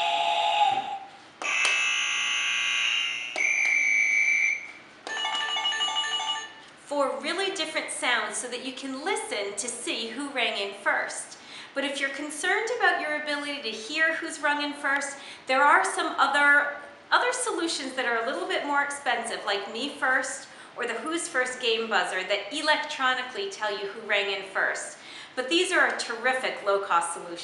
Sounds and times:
Speech: 6.9 - 27.4.

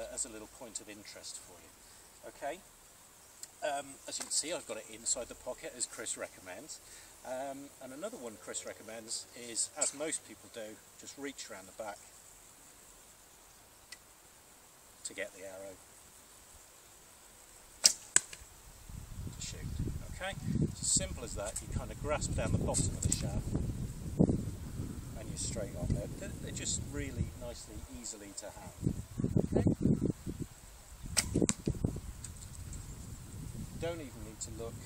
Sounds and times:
Speech: 0.0 - 2.6, 3.6 - 12.1, 15.0 - 15.8, 19.4 - 23.5, 25.2 - 28.8, 33.8 - 34.8
Arrow: 9.8 - 10.0, 17.8 - 18.4, 31.1 - 31.8.

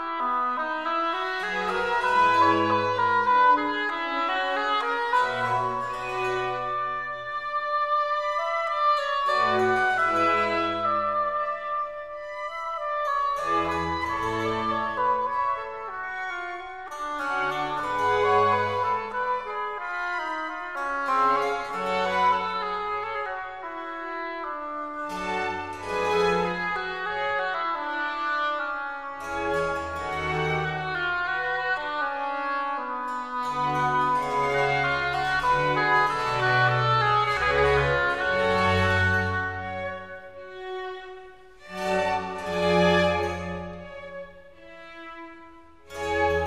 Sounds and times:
Brass instrument: 0.0 - 46.4.

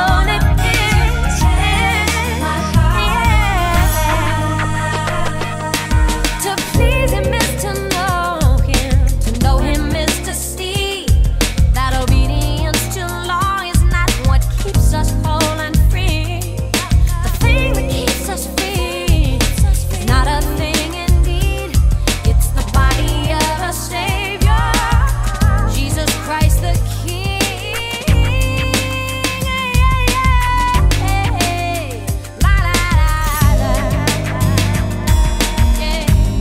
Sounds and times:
Funk: 0.0 - 36.4.

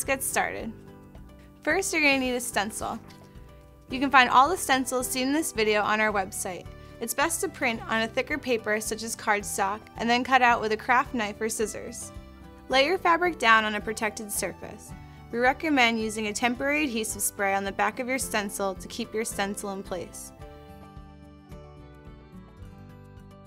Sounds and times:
Speech: 0.0 - 0.7, 1.7 - 3.0, 3.9 - 12.1, 12.7 - 20.3
Music: 0.0 - 23.4.

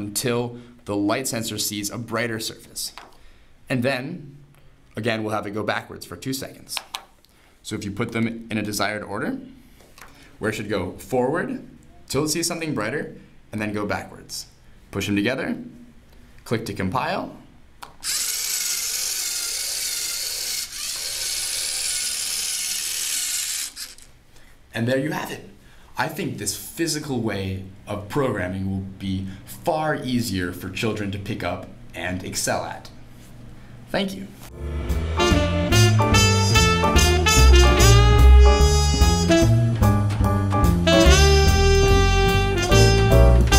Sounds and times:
Speech: 0.0 - 3.0, 3.7 - 4.4, 5.0 - 6.9, 7.6 - 9.6, 10.4 - 15.8, 16.4 - 17.5, 24.7 - 33.0, 33.9 - 34.4
Inside, small room: 0.0 - 43.5.

